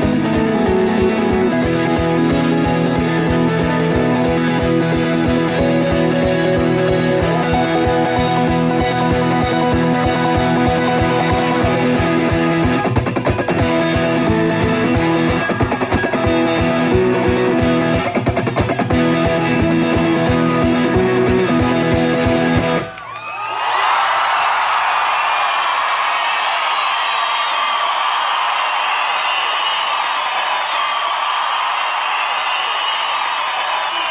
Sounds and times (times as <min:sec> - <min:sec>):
Guitar: 0:00.0 - 0:23.2.